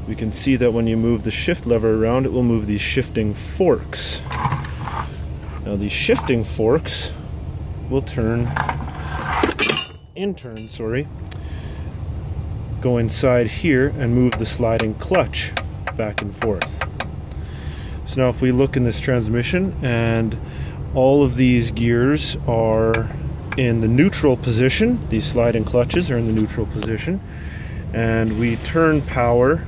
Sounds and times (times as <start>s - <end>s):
Speech: 0.0s - 4.3s, 5.6s - 7.2s, 7.9s - 8.6s, 10.2s - 11.1s, 12.8s - 16.8s, 18.1s - 20.4s, 21.0s - 27.2s, 27.9s - 29.6s.